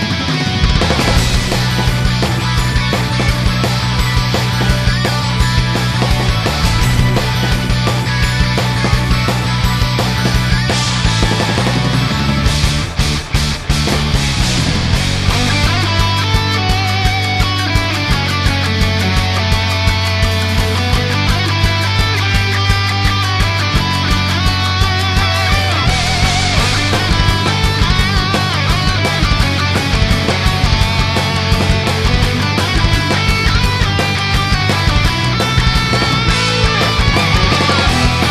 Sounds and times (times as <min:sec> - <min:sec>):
Music: 0:00.0 - 0:38.3.